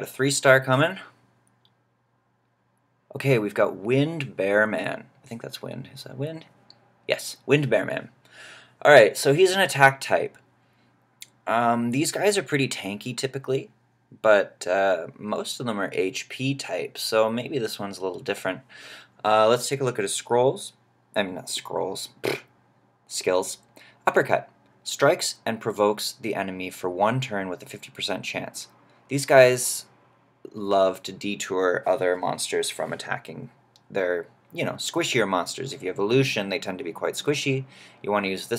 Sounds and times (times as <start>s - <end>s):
Speech: 0.0s - 1.2s, 3.1s - 8.2s, 8.8s - 10.4s, 11.2s - 22.5s, 23.1s - 29.9s, 30.5s - 38.5s.